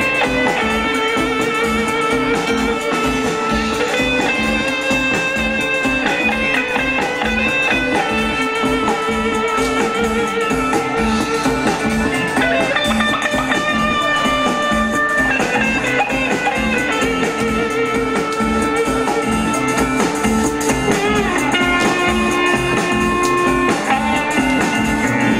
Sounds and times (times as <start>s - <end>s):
Blues: 0.0s - 25.3s.